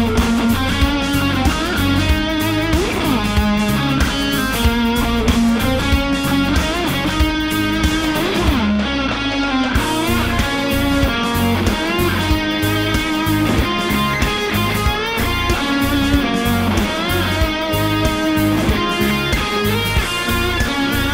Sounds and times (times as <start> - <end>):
Electric guitar: 0.0 - 21.1
Strum: 0.0 - 21.1.